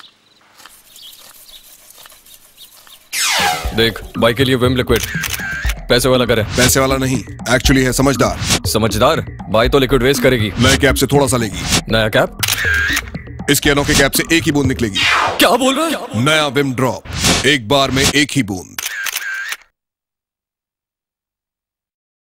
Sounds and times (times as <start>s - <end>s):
Music: 3.4s - 15.5s
Speech: 3.8s - 5.2s, 5.9s - 12.3s, 13.5s - 18.8s.